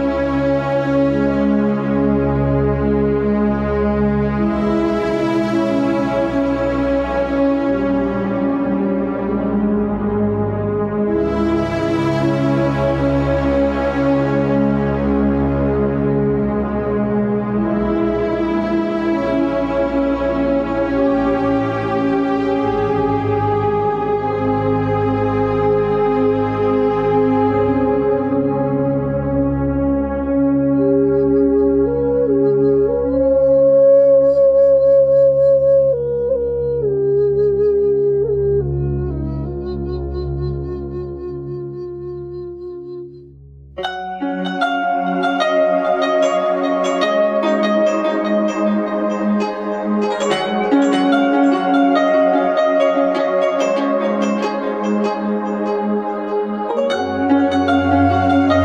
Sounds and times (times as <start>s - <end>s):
Music: 0.0s - 58.6s.